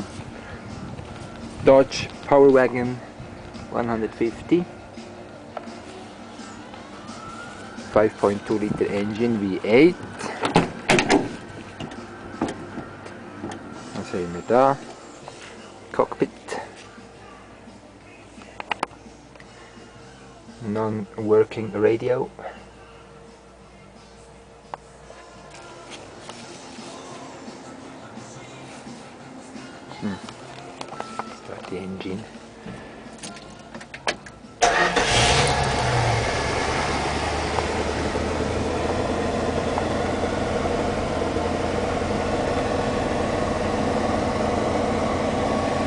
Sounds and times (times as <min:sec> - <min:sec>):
Music: 0:00.0 - 0:43.7
Speech: 0:01.6 - 0:03.0, 0:03.7 - 0:04.7, 0:07.9 - 0:10.0, 0:14.0 - 0:14.8, 0:15.9 - 0:17.5, 0:20.6 - 0:22.5, 0:31.4 - 0:32.3.